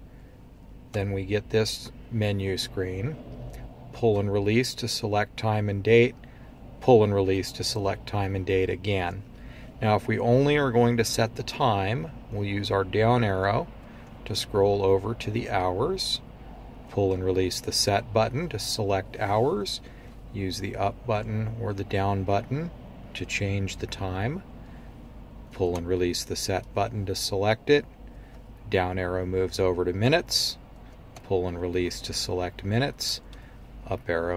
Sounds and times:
Speech: 0.9s - 3.2s, 4.0s - 6.2s, 6.8s - 9.2s, 9.8s - 16.2s, 16.9s - 24.5s, 25.5s - 27.9s, 28.6s - 30.6s, 31.2s - 33.2s, 33.8s - 34.3s.

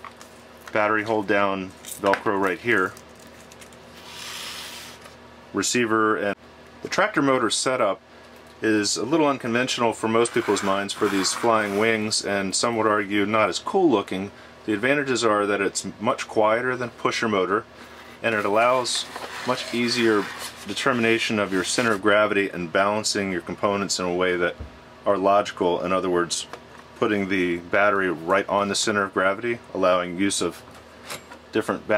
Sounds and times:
Inside, small room: 0.0s - 31.9s
Speech: 0.7s - 3.0s, 5.5s - 8.0s, 8.6s - 30.6s, 31.5s - 31.9s.

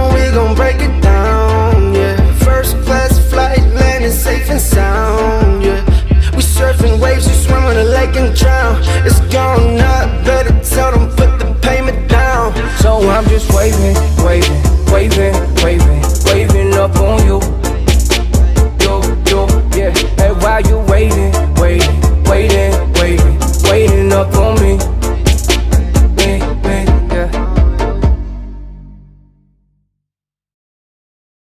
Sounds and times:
Afrobeat: 0.0s - 28.6s.

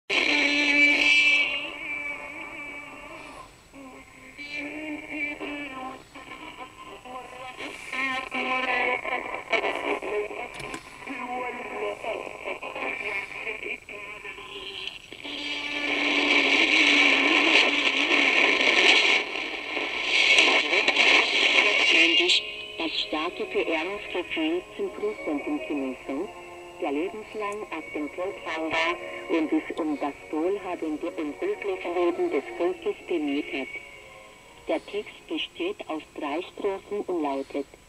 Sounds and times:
Synthetic singing: 0.1s - 15.6s.

